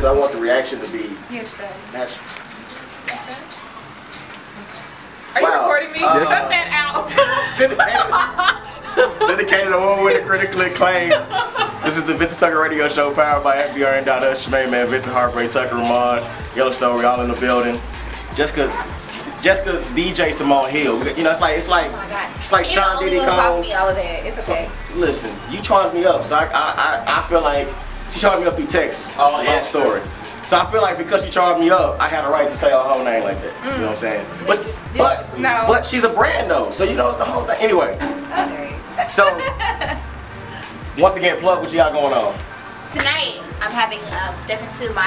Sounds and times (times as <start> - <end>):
Music: 0.0 - 45.0.